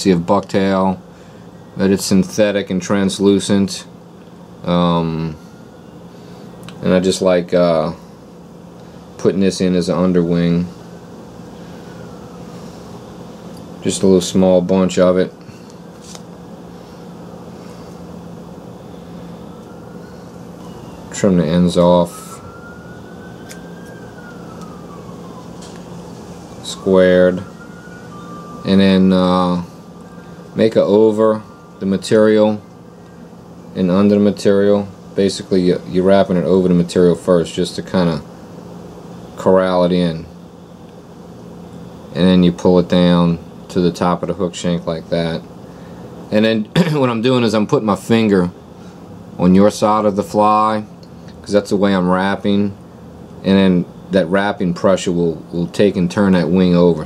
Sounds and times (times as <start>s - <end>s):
Speech: 0.0s - 1.0s, 1.8s - 4.0s, 4.6s - 5.4s, 6.8s - 8.0s, 9.2s - 10.7s, 13.8s - 15.4s, 21.1s - 22.4s, 26.6s - 27.5s, 28.7s - 29.7s, 30.6s - 32.6s, 33.8s - 38.3s, 39.4s - 40.3s, 42.1s - 45.5s, 46.3s - 48.6s, 49.4s - 50.9s, 51.5s - 52.8s, 53.4s - 57.0s.